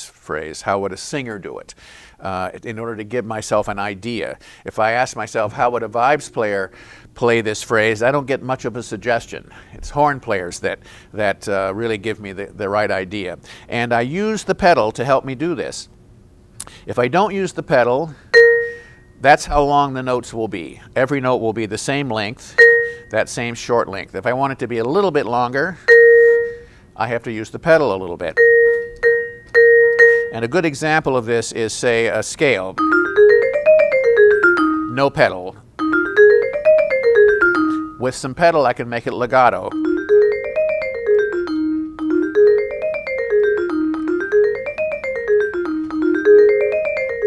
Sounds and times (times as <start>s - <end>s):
Speech: 0.0s - 15.9s, 16.9s - 18.2s, 19.2s - 22.5s, 23.1s - 25.8s, 27.0s - 28.4s, 30.4s - 32.8s, 35.0s - 35.6s, 38.0s - 39.8s
Marimba, xylophone: 18.4s - 18.8s, 22.6s - 23.0s, 25.9s - 26.6s, 28.4s - 30.4s, 32.8s - 35.0s, 35.8s - 38.1s, 39.7s - 47.2s
Vibraphone: 18.4s - 19.0s, 22.6s - 23.1s, 25.9s - 26.7s, 28.4s - 30.4s, 32.8s - 35.1s, 35.8s - 38.1s, 39.7s - 47.2s.